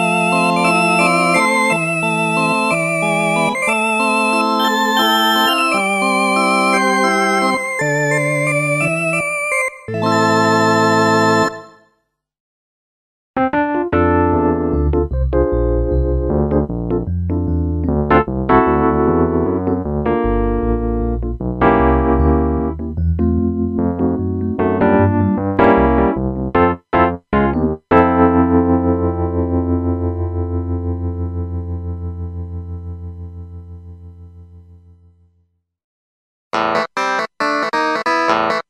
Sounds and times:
Music: 0.0 - 12.2, 13.4 - 35.5, 36.6 - 38.6.

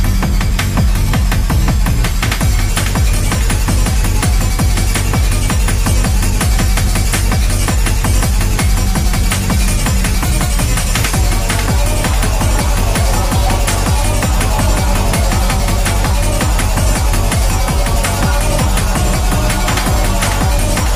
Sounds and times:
Music: 0.0 - 20.9.

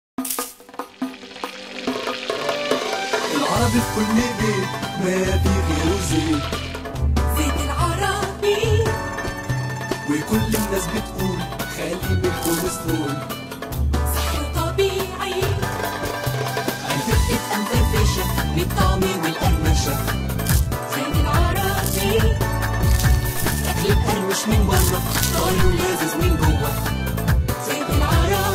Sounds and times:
Jingle (music): 0.2 - 28.5.

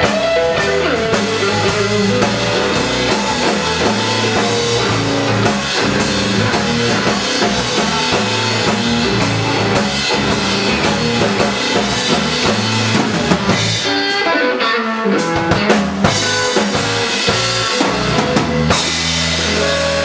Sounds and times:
Blues: 0.0 - 20.0
Drum: 0.0 - 20.0
Drum kit: 0.0 - 20.0
Guitar: 0.0 - 20.0
Rock music: 0.0 - 20.0.

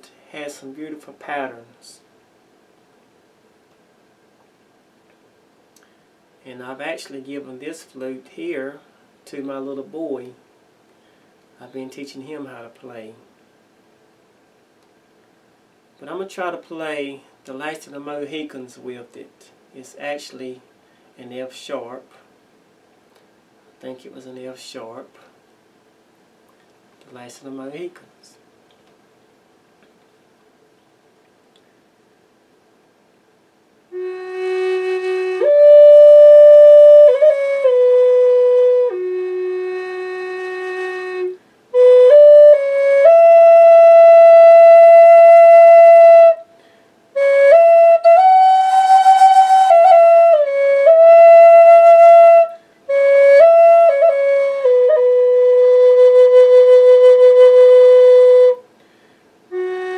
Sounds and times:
Speech: 0.0 - 2.0, 6.4 - 10.4, 11.6 - 13.3, 16.0 - 22.3, 23.8 - 25.4, 27.0 - 28.5
Flute: 33.9 - 46.5, 47.2 - 58.6, 59.5 - 59.9.

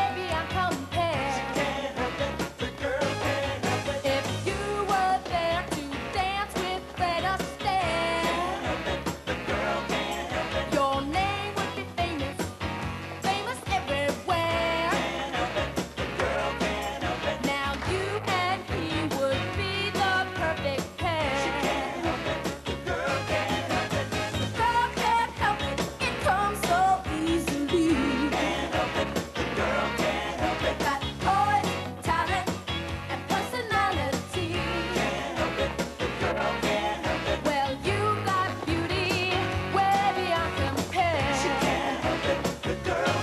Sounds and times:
Singing: 0.0 - 12.4, 13.3 - 32.4, 33.1 - 43.2
Music: 0.0 - 43.2.

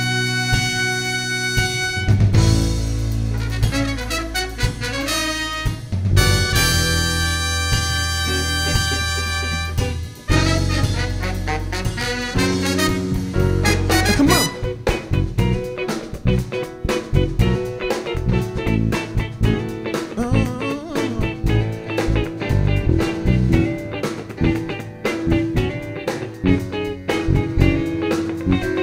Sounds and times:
Music: 0.0 - 28.8.

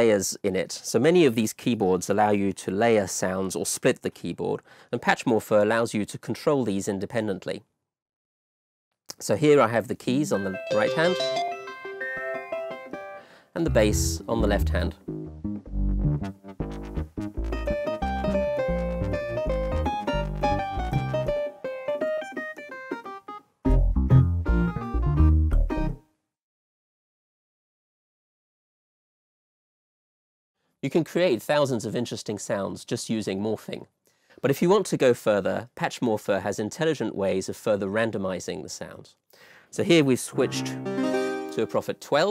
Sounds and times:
Speech: 0.0 - 7.7, 9.1 - 11.4, 13.6 - 15.0, 30.8 - 40.8, 41.5 - 42.3.

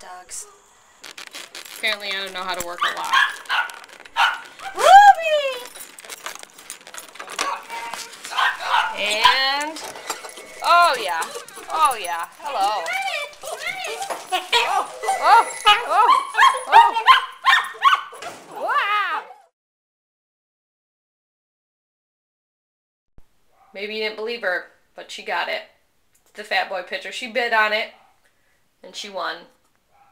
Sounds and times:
Speech: 1.8 - 3.2, 4.8 - 5.8, 8.9 - 9.8, 10.6 - 16.1, 28.8 - 29.5.

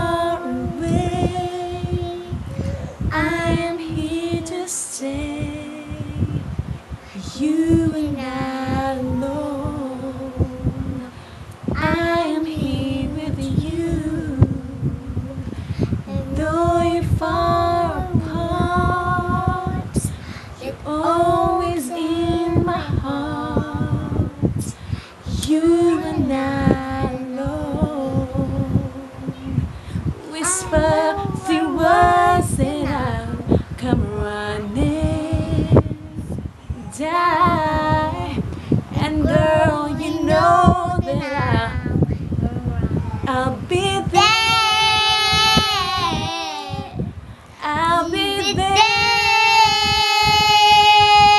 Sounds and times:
Child singing: 0.0 - 6.3, 7.2 - 11.0, 11.7 - 14.6, 15.9 - 24.6, 25.3 - 28.8, 30.1 - 51.3
Female singing: 0.0 - 6.5, 7.2 - 47.0, 47.6 - 51.3.

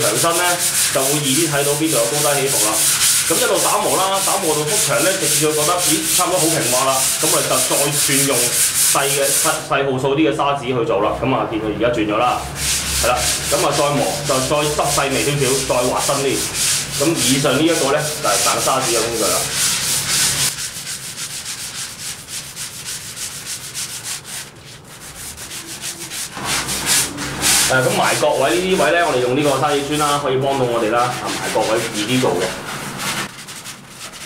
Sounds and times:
Rub: 0.0 - 9.7, 12.4 - 34.2
Sanding: 0.0 - 9.7, 12.4 - 34.2.

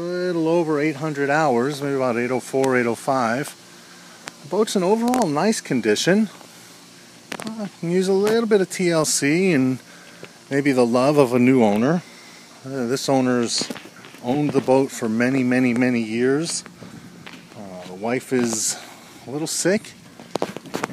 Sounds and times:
Speech: 0.0 - 3.6, 4.4 - 6.4, 7.4 - 9.8, 10.5 - 12.0, 12.6 - 16.7, 17.6 - 20.0.

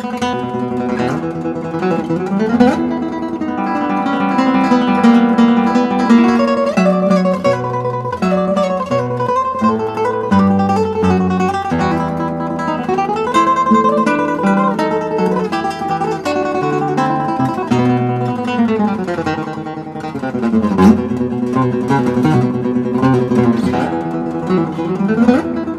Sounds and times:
Music: 0.0 - 25.7.

